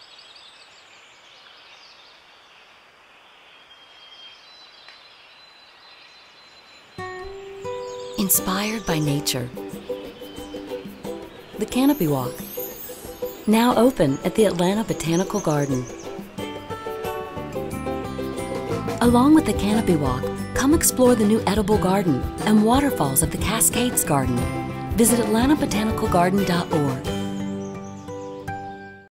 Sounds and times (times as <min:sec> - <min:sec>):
Music: 0:07.0 - 0:29.1
Speech: 0:08.2 - 0:09.6, 0:11.6 - 0:12.4, 0:13.5 - 0:15.9, 0:19.0 - 0:27.1.